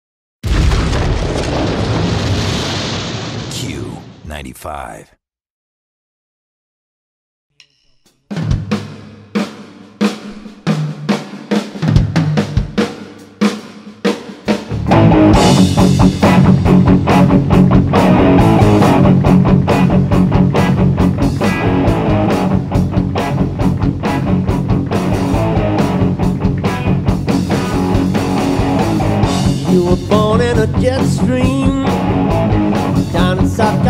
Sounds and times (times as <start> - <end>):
Speech: 3.5 - 5.2.